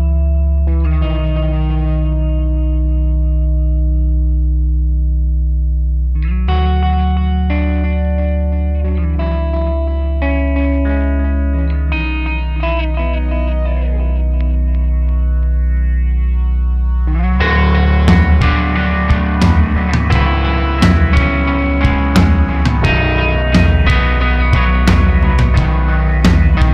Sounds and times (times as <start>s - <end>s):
Music: 0.0s - 26.7s.